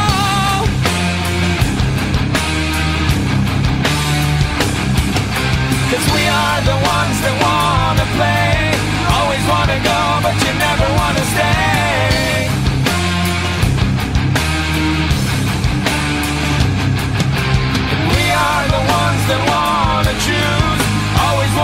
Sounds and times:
Heavy metal: 0.0 - 21.6.

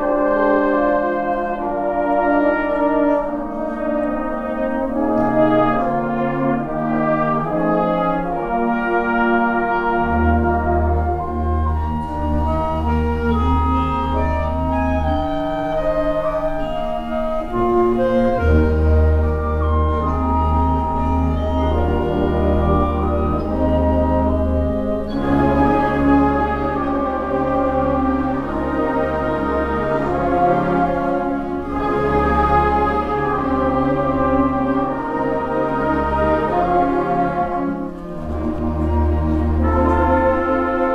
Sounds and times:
Brass instrument: 0.0 - 40.9
Classical music: 0.0 - 40.9
Orchestra: 0.0 - 40.9.

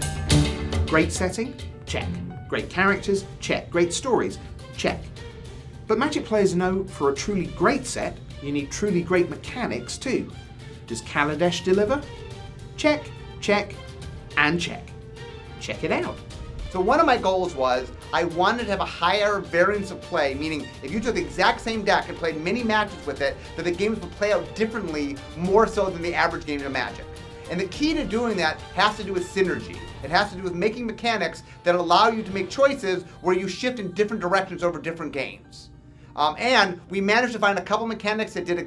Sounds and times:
Music: 0.0 - 38.6
Speech: 0.9 - 5.1, 5.9 - 12.1, 12.8 - 13.8, 14.4 - 14.9, 15.6 - 16.2, 16.8 - 38.6.

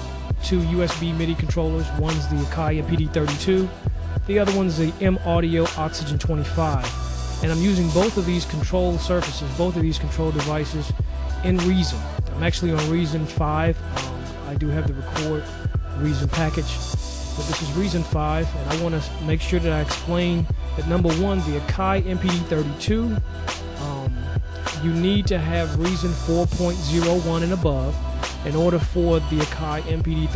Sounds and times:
Speech: 0.4 - 30.3.

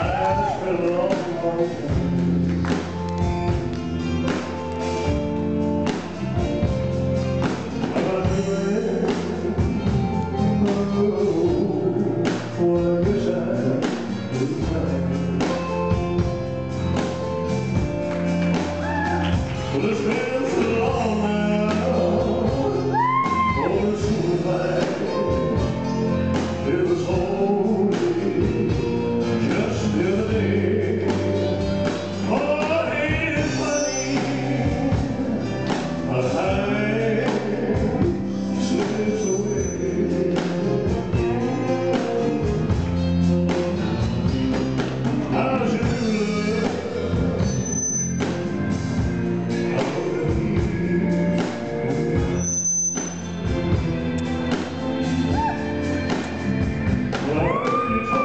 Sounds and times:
Male singing: 0.0 - 2.2, 7.7 - 15.7, 18.8 - 42.8, 45.0 - 47.8, 49.5 - 52.4, 57.1 - 58.2
Music: 0.0 - 58.2.

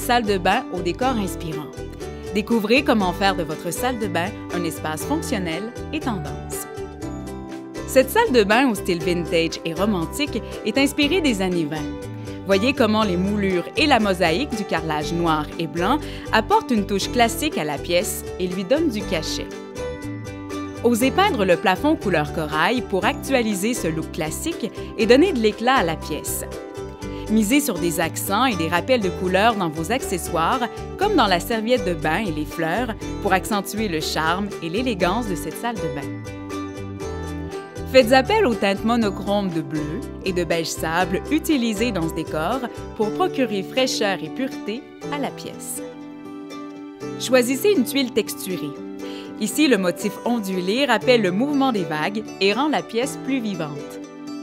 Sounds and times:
Speech: 0.0 - 1.8, 2.4 - 6.6, 7.9 - 11.9, 12.5 - 19.5, 20.8 - 26.5, 27.3 - 36.1, 37.9 - 45.8, 47.2 - 48.7, 49.4 - 53.9
Music: 0.0 - 54.4.

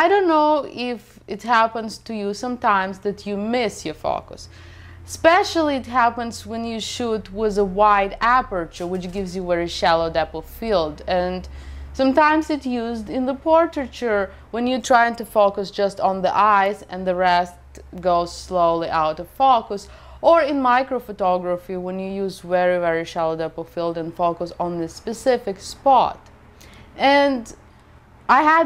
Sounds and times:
Speech: 0.0 - 4.5, 5.1 - 26.2, 27.0 - 27.6, 28.3 - 28.6.

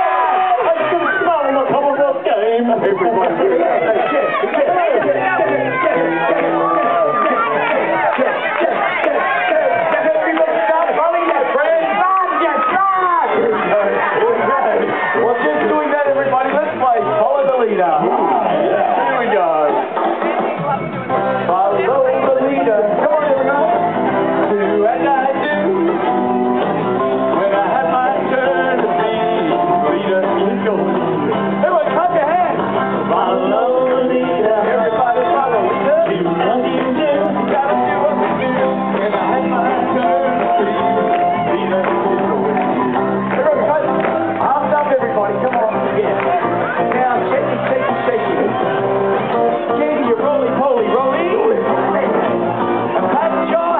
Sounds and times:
Male singing: 0.0 - 19.7, 21.4 - 26.4, 27.1 - 48.7, 49.3 - 52.3, 52.9 - 53.7
Speech: 0.0 - 23.8, 31.6 - 38.2, 43.3 - 48.6
Music: 0.0 - 53.7.

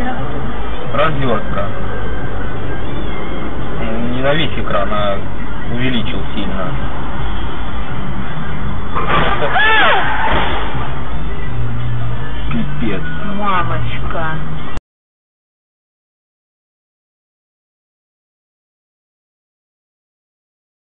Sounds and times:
Music: 0.0 - 14.8.

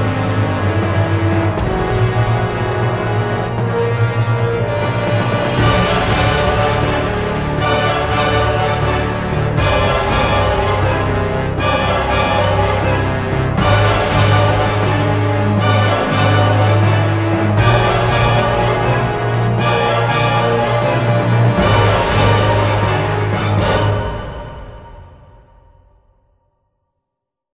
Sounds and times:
Music: 0.0 - 27.4.

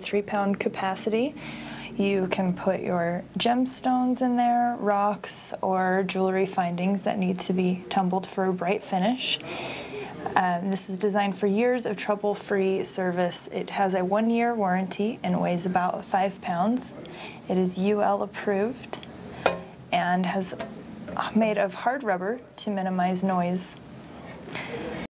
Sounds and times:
Speech: 0.0 - 1.4, 2.0 - 19.1, 20.0 - 23.8.

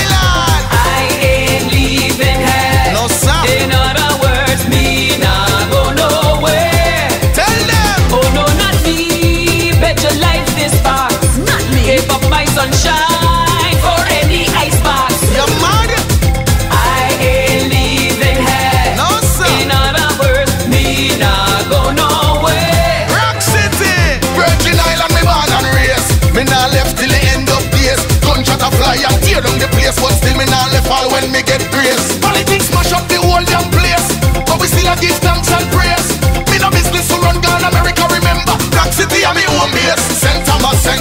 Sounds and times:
Music: 0.0 - 41.0.

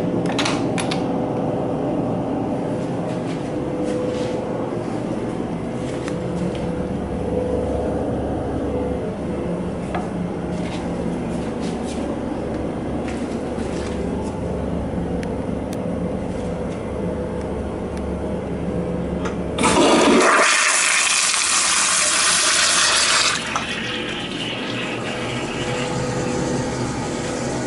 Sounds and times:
Toilet flush: 19.6 - 27.6.

